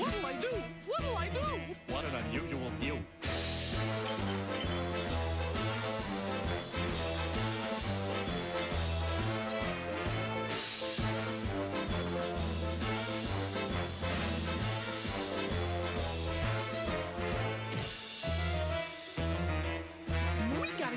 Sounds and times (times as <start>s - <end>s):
Music: 0.0s - 20.9s.